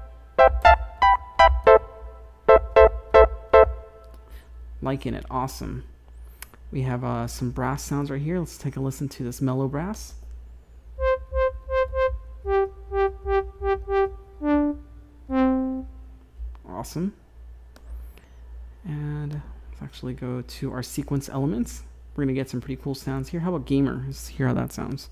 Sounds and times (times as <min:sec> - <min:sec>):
Synthesizer: 0:00.0 - 0:04.2, 0:11.0 - 0:16.0
Speech: 0:04.8 - 0:05.9, 0:06.7 - 0:10.2, 0:16.6 - 0:17.2, 0:18.8 - 0:25.1.